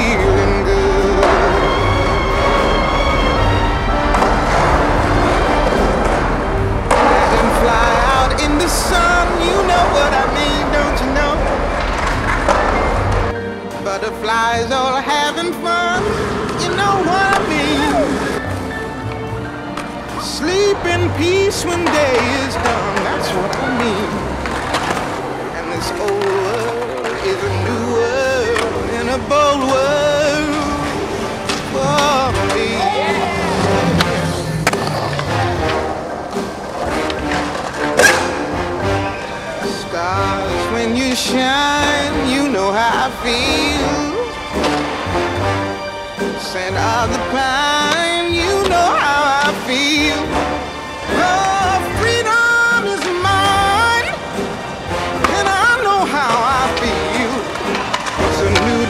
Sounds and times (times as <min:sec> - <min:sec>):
Skateboard: 0:00.0 - 0:13.4, 0:15.2 - 0:58.8.